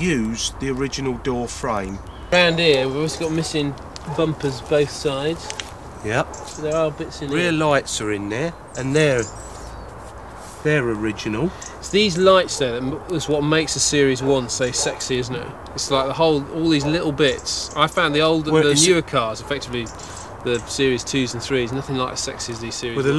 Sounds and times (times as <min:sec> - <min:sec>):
Speech: 0:00.0 - 0:09.4, 0:10.6 - 0:23.1.